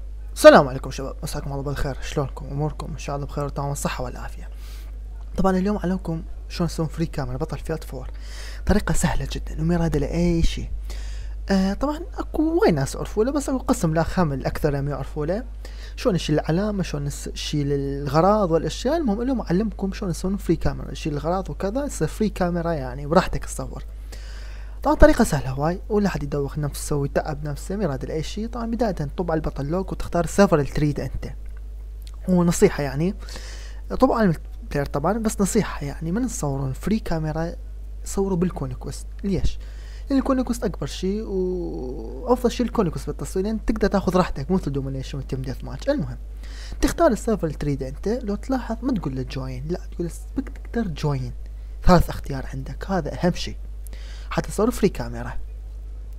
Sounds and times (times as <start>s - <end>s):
Speech: 0.3s - 4.5s, 5.1s - 10.8s, 11.5s - 23.9s, 24.8s - 31.4s, 32.1s - 33.2s, 33.9s - 46.2s, 46.8s - 53.6s, 54.3s - 55.5s.